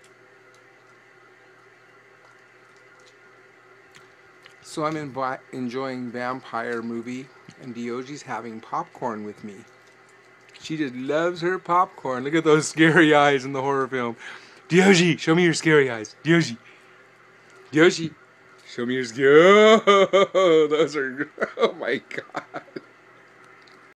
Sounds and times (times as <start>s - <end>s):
Speech: 4.6s - 9.7s, 10.6s - 16.6s, 17.7s - 19.8s, 20.4s - 22.3s.